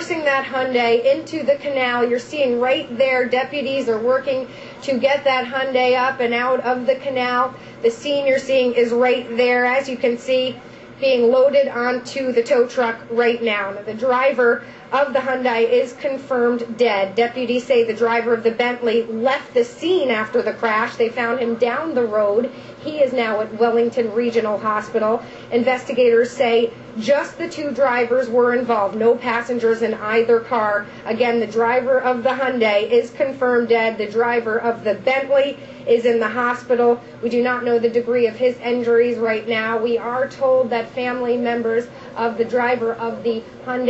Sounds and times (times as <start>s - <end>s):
Speech: 0.0s - 43.9s.